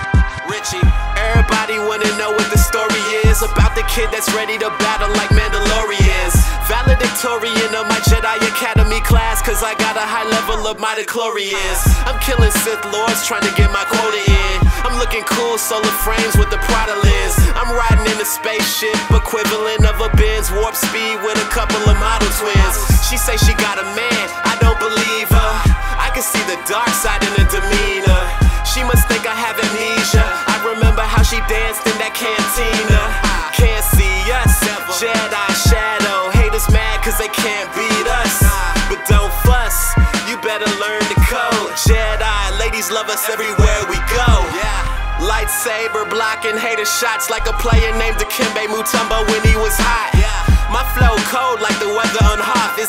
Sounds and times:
Music: 0:00.0 - 0:52.8.

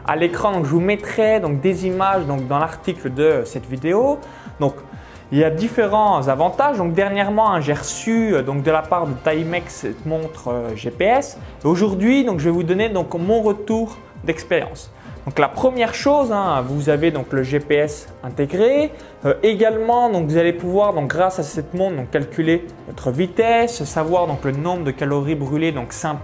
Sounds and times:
Music: 0:00.0 - 0:26.2
Speech: 0:00.0 - 0:26.2.

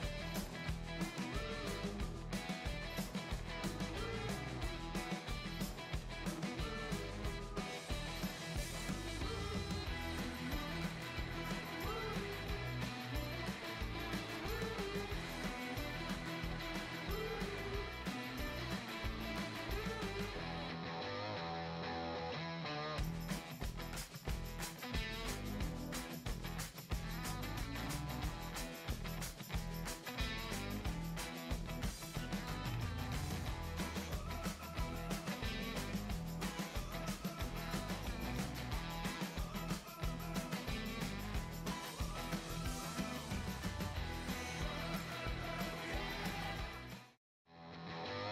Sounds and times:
Music: 0:00.0 - 0:48.3.

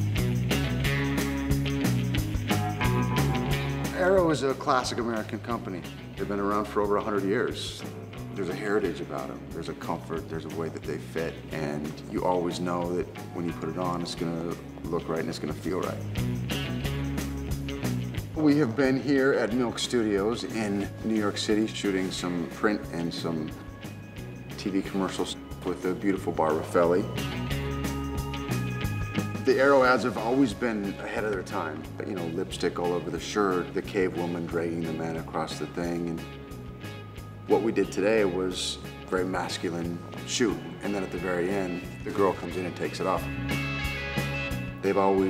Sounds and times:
Music: 0:00.0 - 0:45.3
Speech: 0:03.9 - 0:16.0, 0:18.4 - 0:23.6, 0:24.6 - 0:27.1, 0:29.4 - 0:36.2, 0:37.5 - 0:43.3, 0:44.8 - 0:45.3.

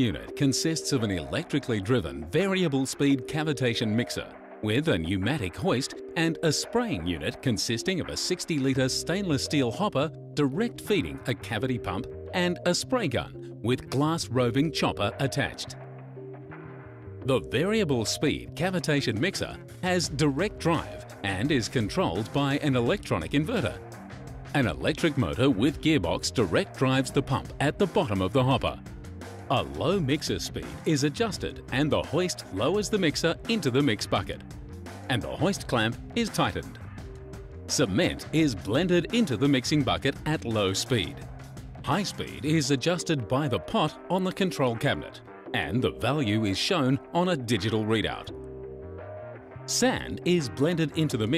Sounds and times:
Speech: 0:00.0 - 0:15.8, 0:17.3 - 0:23.8, 0:24.6 - 0:28.8, 0:29.5 - 0:34.4, 0:35.1 - 0:36.8, 0:37.7 - 0:41.2, 0:41.9 - 0:48.3, 0:49.7 - 0:51.3
Music: 0:00.0 - 0:51.3.

